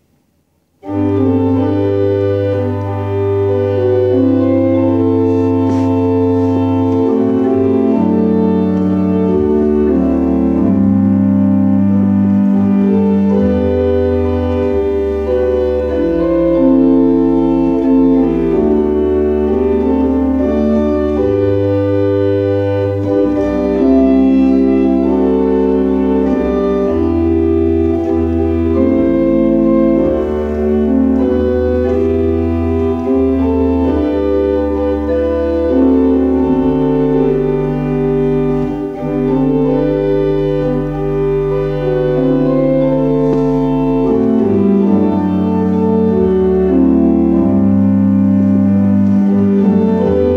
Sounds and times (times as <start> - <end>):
Piano: 0.0 - 50.3.